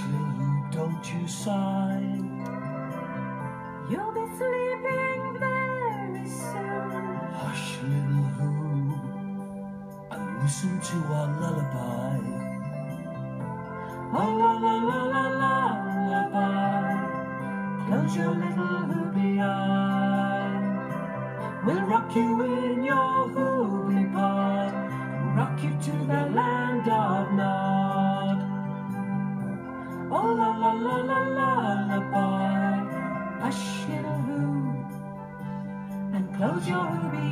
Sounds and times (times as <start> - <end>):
Music: 0.0 - 37.3.